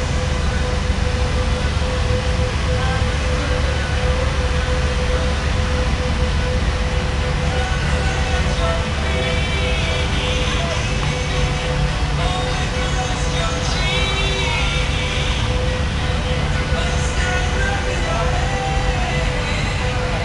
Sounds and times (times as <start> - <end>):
Music: 0.0 - 20.2.